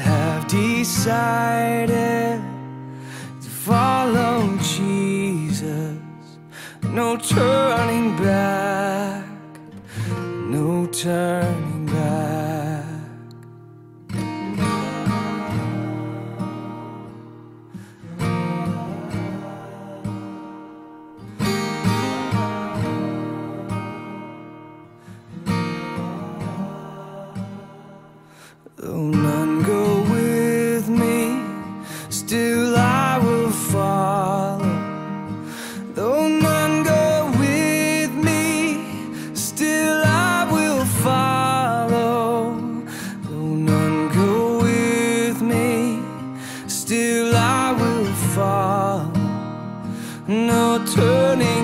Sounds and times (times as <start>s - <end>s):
Music: 0.0s - 51.6s.